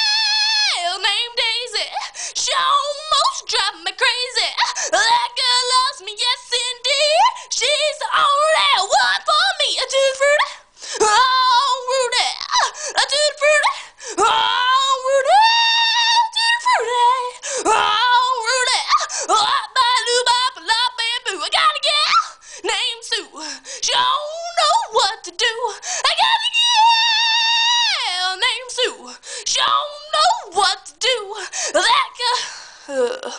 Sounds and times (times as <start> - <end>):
Female singing: 0.0 - 33.3.